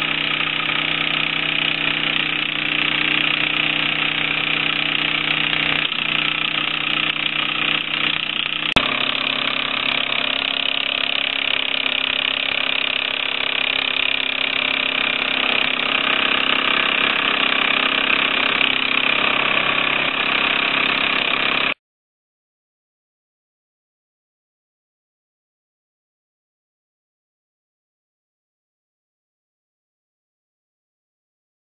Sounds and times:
Engine: 0.0s - 21.8s.

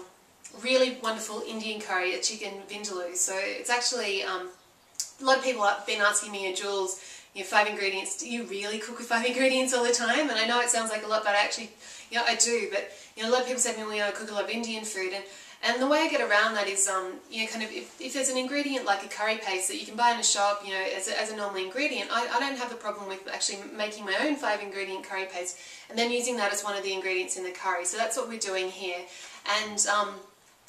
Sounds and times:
Speech: 0.0s - 30.3s.

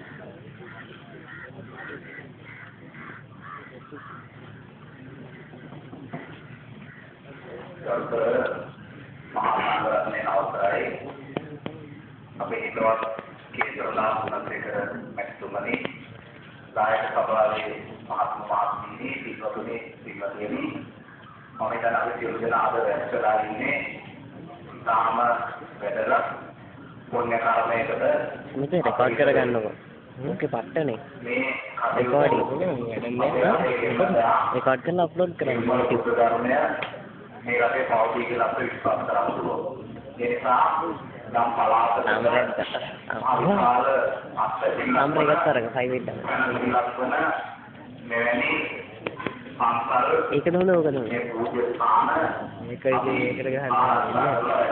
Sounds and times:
Narration, monologue: 0.0s - 54.7s
Male speech, man speaking: 7.4s - 16.0s, 16.8s - 20.9s, 21.6s - 54.7s.

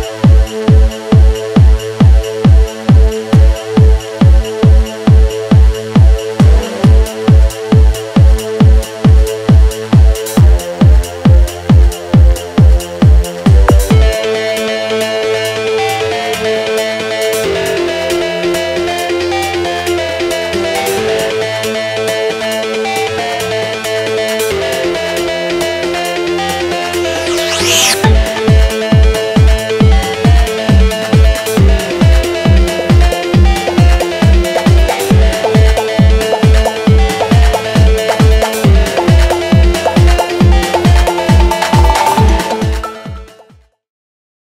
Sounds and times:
Music: 0.0s - 43.8s.

